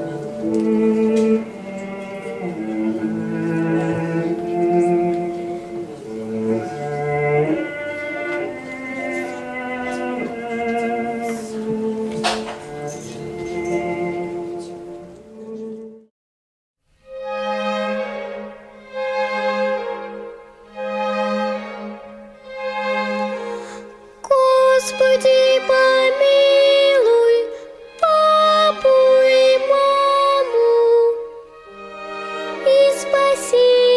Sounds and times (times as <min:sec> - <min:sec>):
Music: 0:00.0 - 0:16.1, 0:16.8 - 0:33.9.